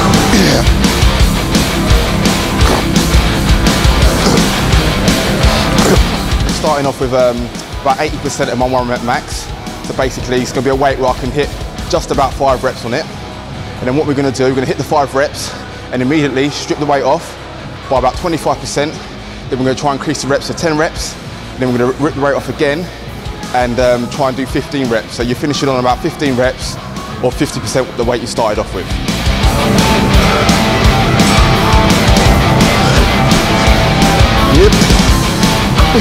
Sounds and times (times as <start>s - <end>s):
Music: 0.0s - 36.0s.